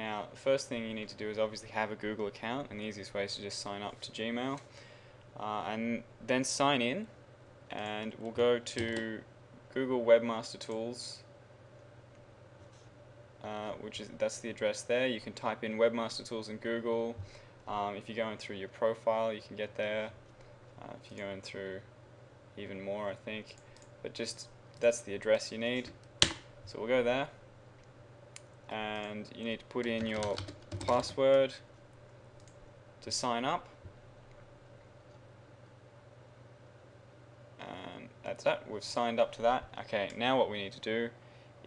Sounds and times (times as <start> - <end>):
Speech: 0.0 - 4.7, 5.4 - 11.3, 13.4 - 20.2, 20.8 - 21.9, 22.6 - 25.9, 26.7 - 27.4, 28.7 - 31.7, 33.0 - 33.8, 37.6 - 41.2.